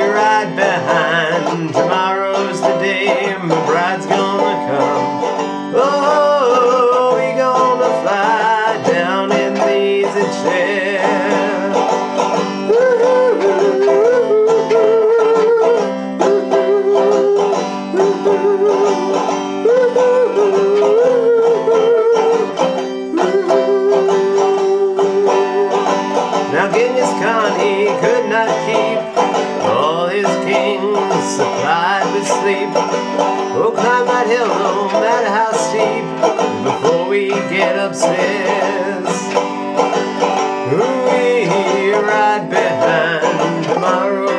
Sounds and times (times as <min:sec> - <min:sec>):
Banjo: 0:00.0 - 0:44.3.